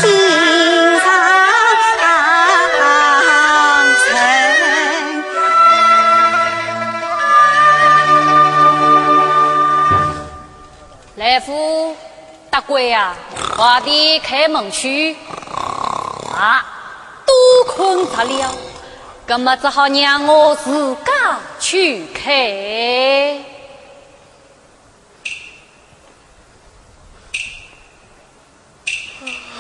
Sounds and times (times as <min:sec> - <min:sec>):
Female speech, woman speaking: 0:11.2 - 0:15.3, 0:16.4 - 0:16.7, 0:17.4 - 0:23.7.